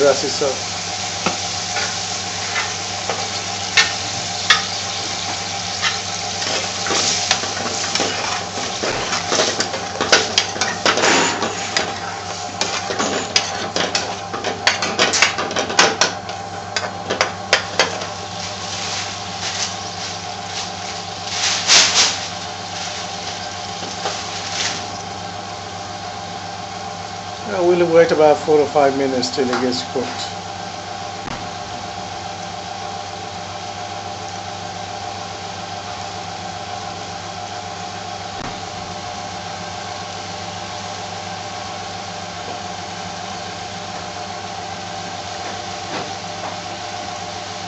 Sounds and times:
Speech: 0.0s - 0.6s, 27.4s - 30.4s.

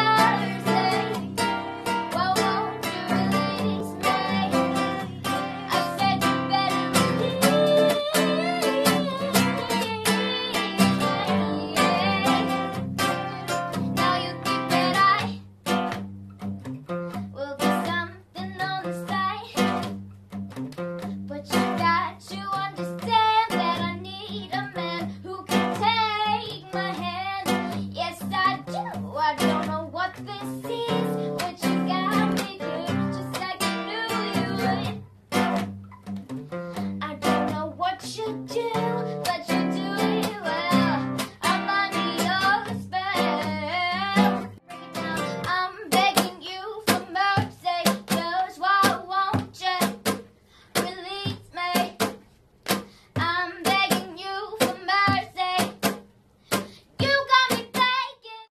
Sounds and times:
Female singing: 0.0s - 15.4s, 17.4s - 19.8s, 21.3s - 35.0s, 37.0s - 50.1s, 50.8s - 52.1s, 53.2s - 55.8s, 57.0s - 58.5s
Music: 0.0s - 58.5s.

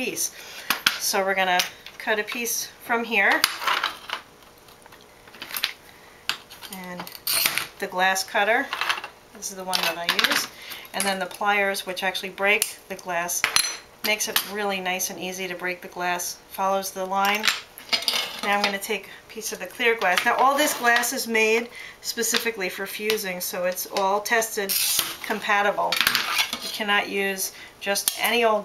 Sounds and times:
Speech: 1.0s - 3.4s, 7.8s - 8.7s, 9.4s - 13.4s, 14.1s - 17.5s, 18.4s - 26.0s, 26.7s - 28.6s.

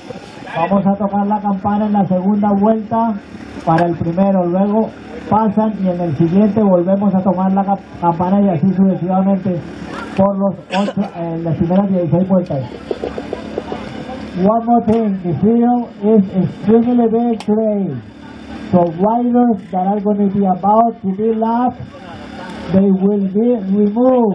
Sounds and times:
Speech: 0.5s - 18.1s, 18.7s - 24.3s.

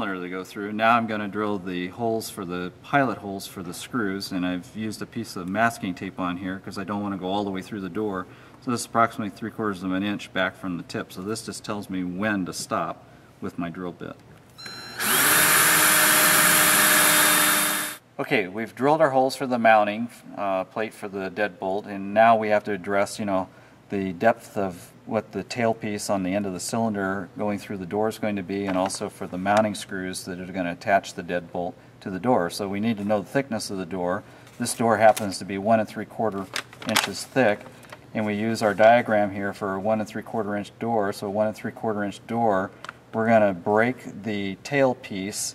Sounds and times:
Drill: 14.9s - 18.0s.

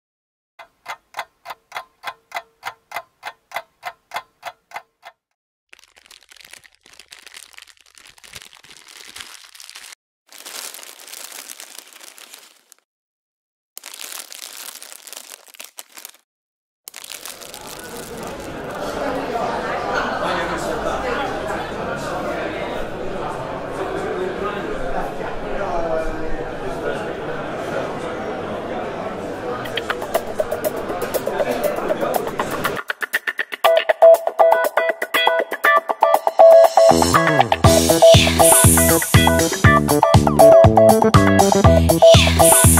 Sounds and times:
Speech: 17.5s - 32.8s
Music: 30.0s - 42.8s.

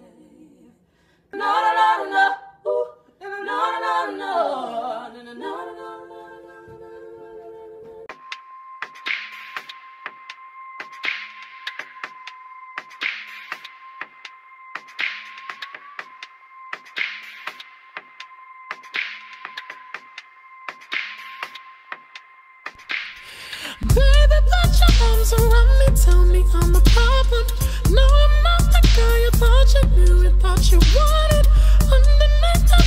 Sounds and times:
A capella: 0.0s - 8.2s, 23.5s - 32.8s.

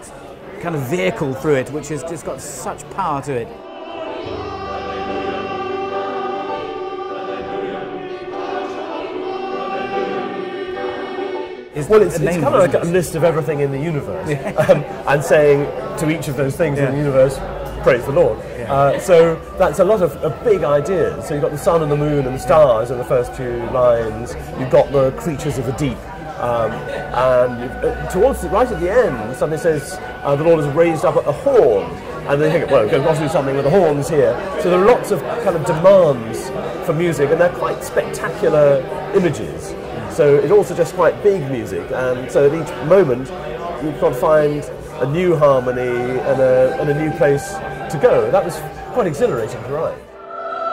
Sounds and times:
Speech: 0.0s - 3.5s, 11.8s - 50.1s
Music: 0.0s - 50.7s.

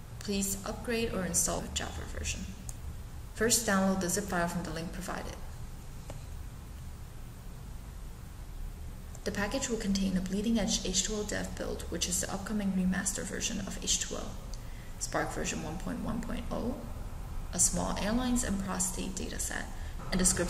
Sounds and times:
Speech: 0.2s - 2.6s, 3.4s - 5.6s, 9.2s - 16.9s, 17.6s - 20.5s.

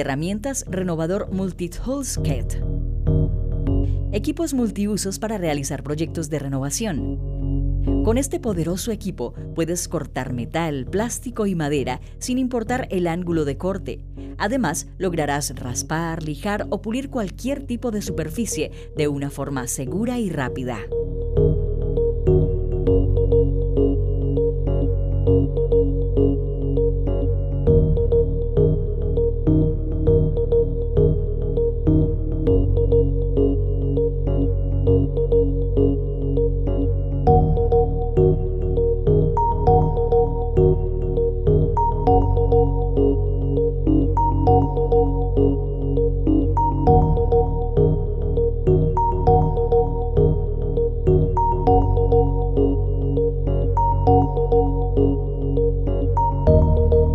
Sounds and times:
Music: 0.0s - 57.1s.

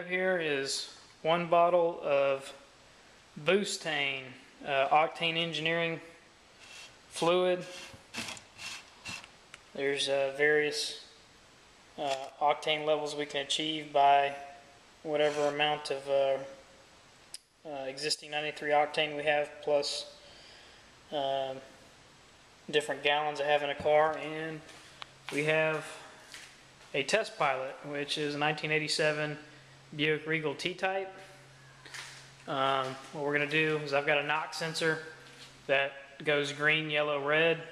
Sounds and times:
Speech: 0.0s - 2.6s, 3.4s - 6.1s, 7.2s - 7.8s, 9.8s - 11.0s, 12.0s - 14.5s, 15.1s - 16.6s, 17.7s - 20.2s, 21.1s - 21.7s, 22.7s - 24.7s, 25.3s - 26.1s, 26.9s - 29.4s, 30.0s - 31.2s, 32.5s - 35.1s, 35.7s - 37.7s.

